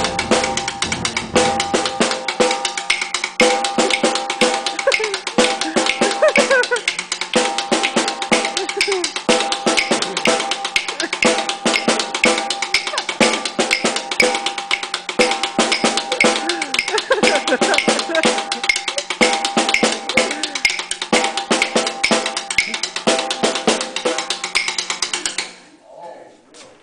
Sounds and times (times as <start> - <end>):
Percussion: 0.0 - 25.7.